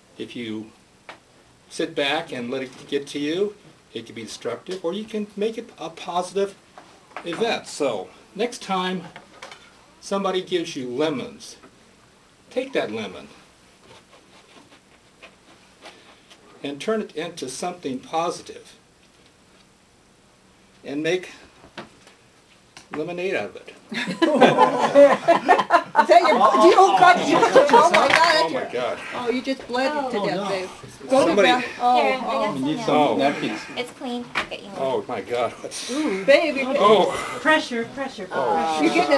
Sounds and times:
Narration, monologue: 0.0 - 39.1
Male speech, man speaking: 0.2 - 0.8, 1.7 - 6.6, 7.2 - 9.2, 10.0 - 11.6, 12.5 - 13.4, 16.6 - 18.8, 20.8 - 21.4, 22.9 - 23.8, 26.2 - 29.4, 30.1 - 33.8, 34.7 - 37.3, 38.3 - 39.1.

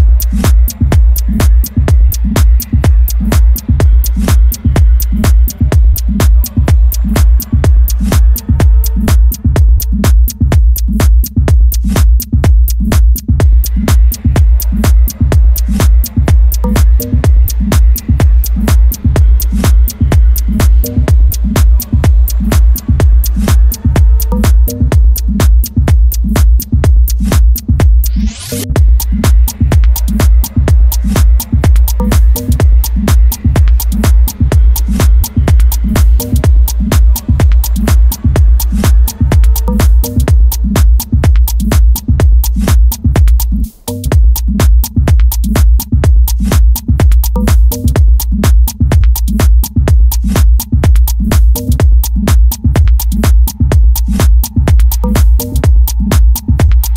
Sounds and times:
Music: 0.0 - 56.9.

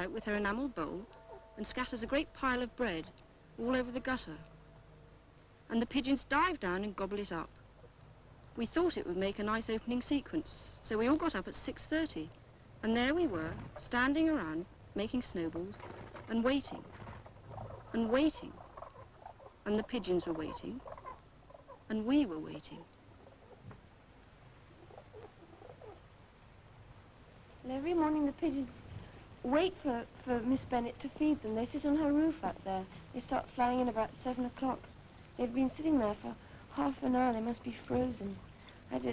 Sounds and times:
Speech: 0.0 - 4.5, 5.7 - 7.5, 8.6 - 16.9, 18.0 - 18.6, 19.7 - 20.8, 21.9 - 22.9, 27.6 - 28.8, 29.4 - 39.1.

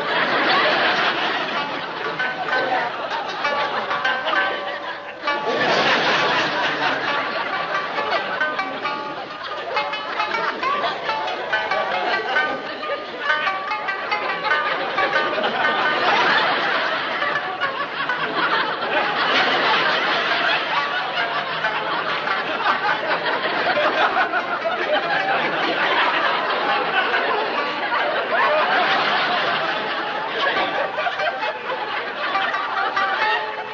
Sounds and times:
Music: 0.0 - 33.7.

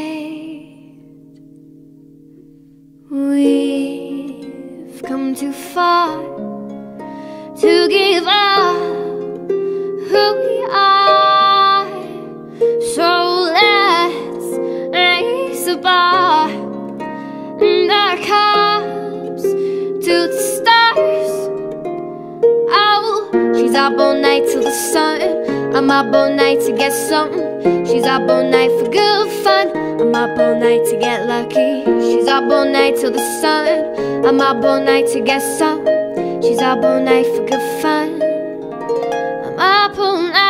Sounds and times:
Plucked string instrument: 0.0 - 40.5.

